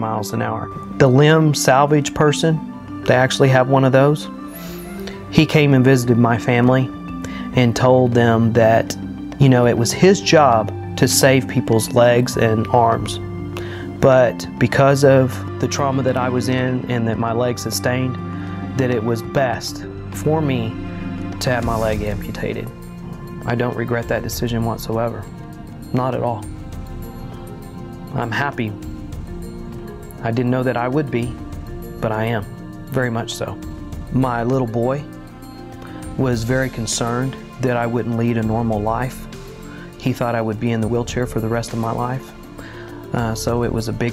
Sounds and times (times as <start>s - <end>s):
Speech: 0.0s - 4.3s, 5.3s - 6.9s, 7.5s - 13.2s, 14.0s - 20.8s, 21.4s - 22.7s, 23.4s - 25.3s, 25.9s - 26.5s, 28.1s - 28.8s, 30.1s - 31.4s, 32.0s - 35.1s, 36.2s - 39.2s, 40.0s - 42.3s, 43.1s - 44.1s
Music: 0.0s - 44.1s.